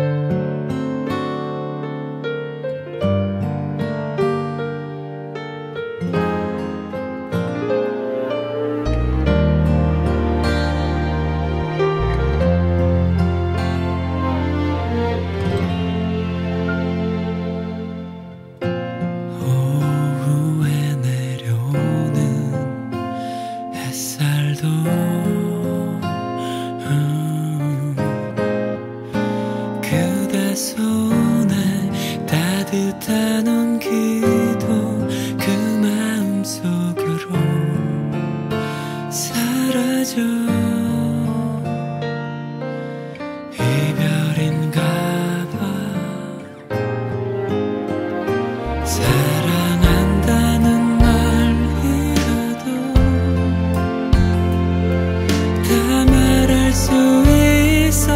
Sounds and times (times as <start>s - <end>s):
Music: 0.0s - 58.1s.